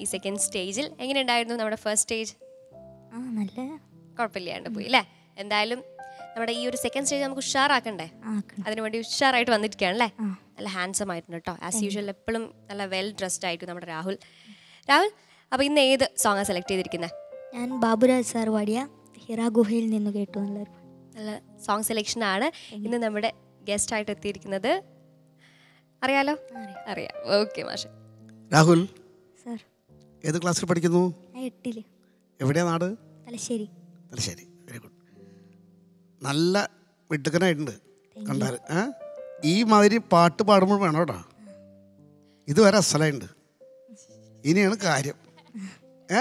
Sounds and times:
Music: 0:00.0 - 0:46.2.

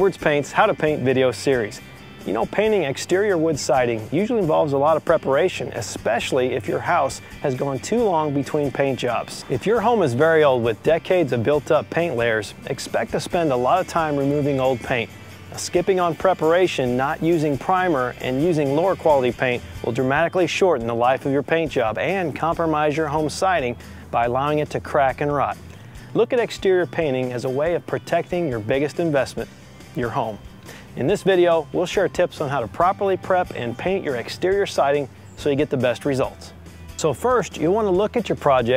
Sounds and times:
Speech: 0:00.0 - 0:30.4, 0:31.0 - 0:38.7
Music: 0:00.0 - 0:38.7.

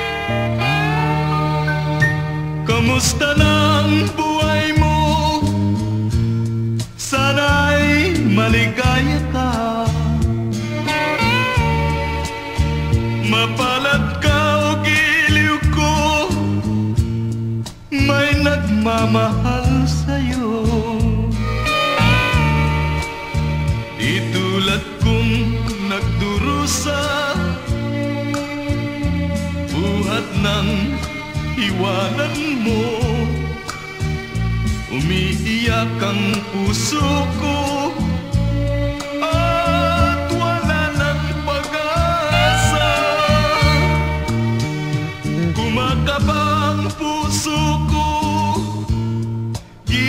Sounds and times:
Music: 0:00.0 - 0:50.0.

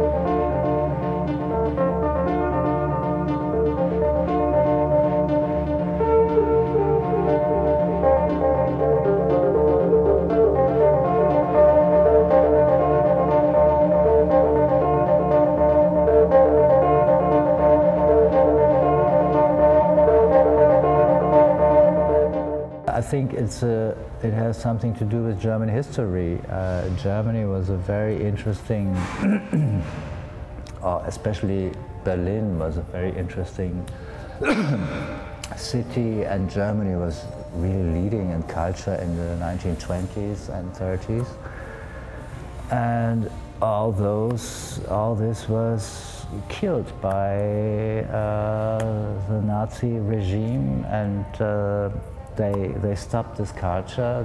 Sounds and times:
Music: 0:00.0 - 0:54.2
Speech: 0:22.9 - 0:29.1, 0:30.8 - 0:33.9, 0:35.5 - 0:41.4, 0:42.7 - 0:54.2
Inside, large room or hall: 0:23.0 - 0:41.8.

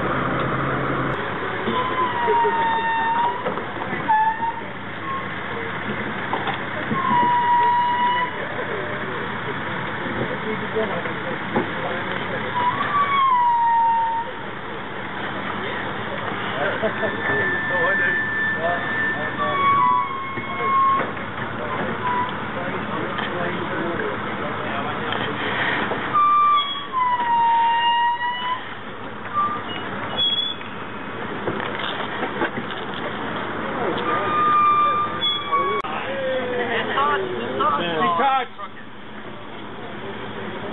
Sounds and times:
Outside, urban or manmade: 0:00.0 - 0:40.7
Vehicle: 0:00.0 - 0:40.7
Speech: 0:01.5 - 0:13.1, 0:14.0 - 0:25.8, 0:33.1 - 0:40.7.

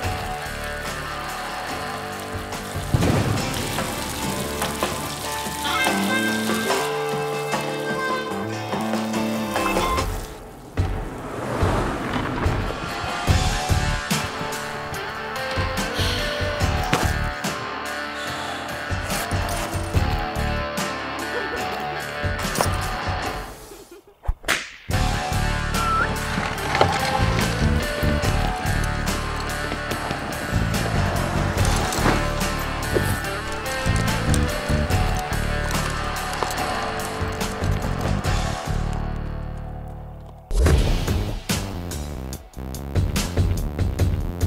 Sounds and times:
Music: 0:00.0 - 0:11.0, 0:12.2 - 0:23.9, 0:24.9 - 0:44.4.

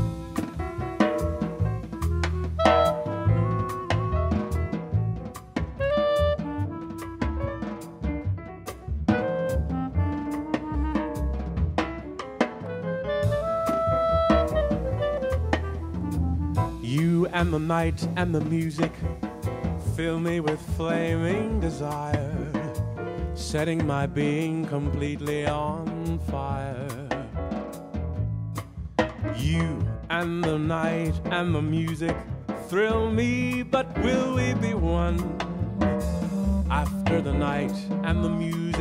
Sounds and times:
Jazz: 0:00.0 - 0:38.8.

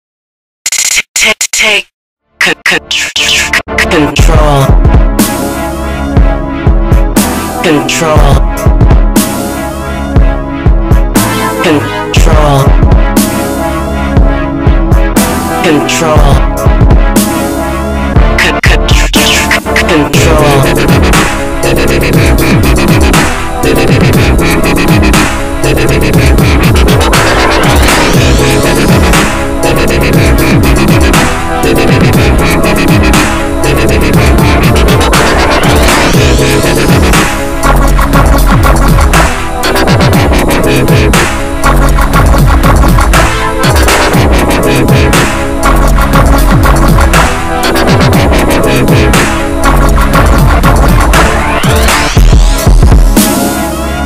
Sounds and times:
Dubstep: 0:00.7 - 0:01.8, 0:02.4 - 0:10.4, 0:11.0 - 0:54.0
Speech: 0:01.1 - 0:04.8, 0:07.6 - 0:08.4, 0:11.6 - 0:12.8, 0:15.6 - 0:16.4, 0:18.4 - 0:20.8.

